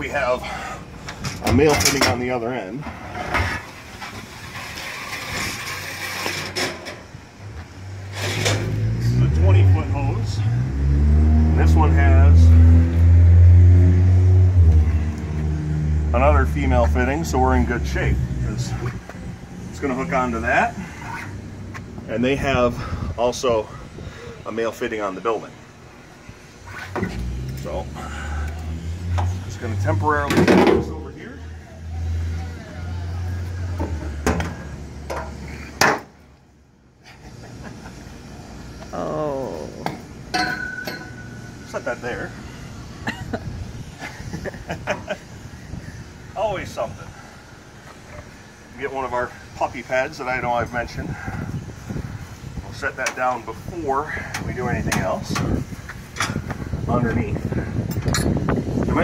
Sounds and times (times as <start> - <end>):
Vehicle: 0.0 - 59.0.